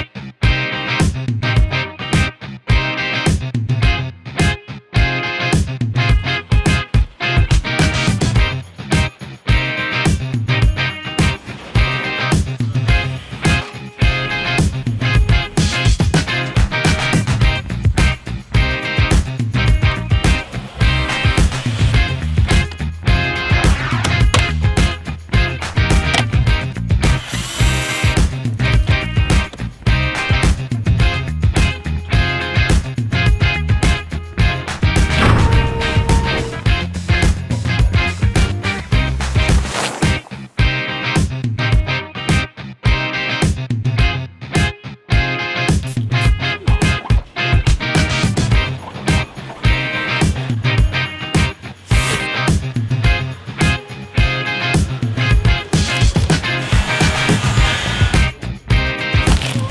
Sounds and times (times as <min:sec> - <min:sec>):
Music: 0:00.0 - 0:59.7.